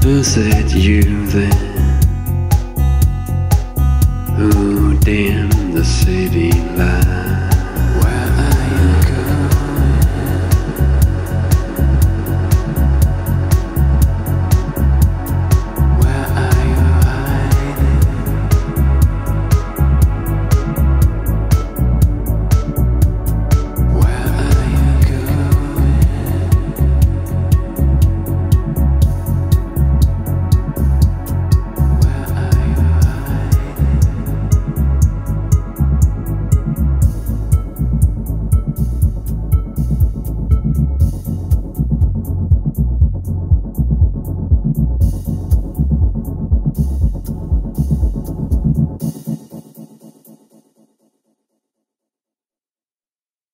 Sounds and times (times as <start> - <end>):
Throbbing: 0.0 - 49.4
Music: 0.0 - 51.9.